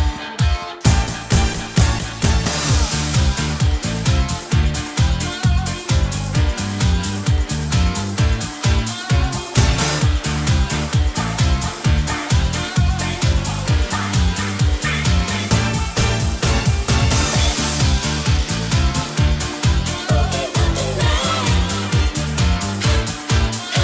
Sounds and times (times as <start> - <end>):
Music: 0.0 - 23.8.